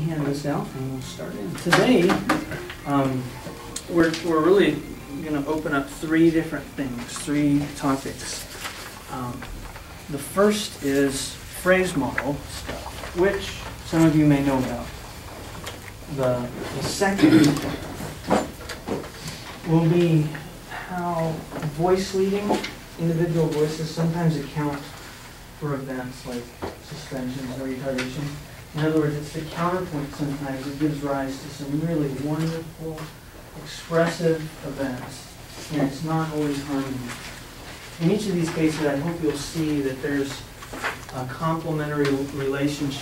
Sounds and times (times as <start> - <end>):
Speech: 0.0 - 15.0, 16.1 - 17.8, 19.6 - 25.0, 25.6 - 37.3, 38.0 - 40.5, 41.1 - 43.0.